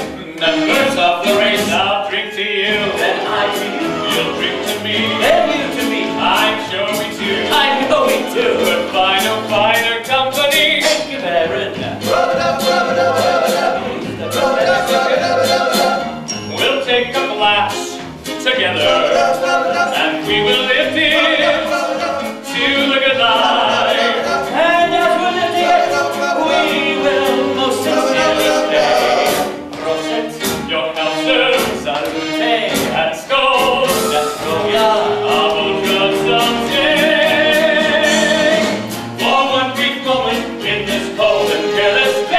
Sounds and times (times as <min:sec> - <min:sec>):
Music: 0:00.0 - 0:42.3.